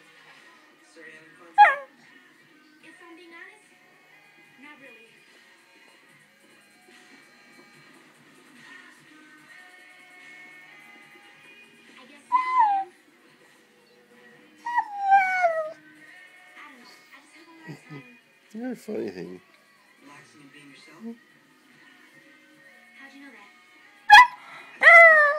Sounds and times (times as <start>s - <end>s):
Music: 0.0s - 25.3s
Bow-wow: 1.6s - 1.9s, 24.1s - 25.3s
Whimper (dog): 1.6s - 1.9s, 12.3s - 13.0s, 14.7s - 15.8s, 24.1s - 25.3s.